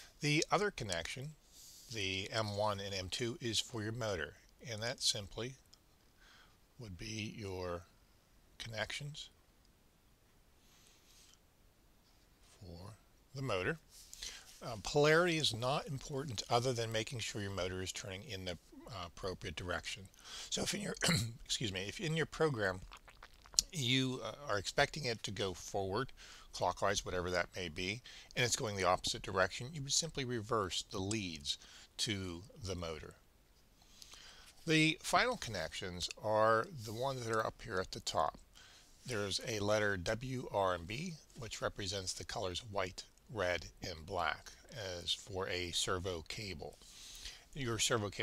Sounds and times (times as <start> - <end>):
Inside, small room: 0.0 - 48.2
Speech: 0.2 - 5.6, 6.8 - 7.9, 8.6 - 9.4, 12.5 - 13.8, 14.6 - 22.9, 23.6 - 33.2, 34.6 - 38.4, 39.0 - 46.8, 47.6 - 48.2.